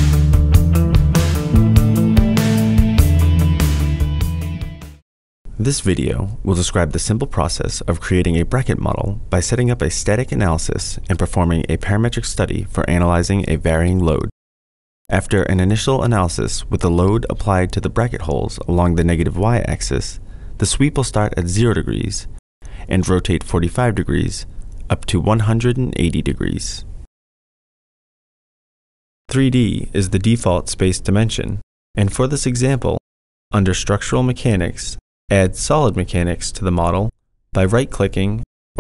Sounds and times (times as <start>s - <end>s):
Speech: 5.6s - 14.3s, 15.1s - 26.9s, 29.3s - 33.0s, 33.6s - 38.8s.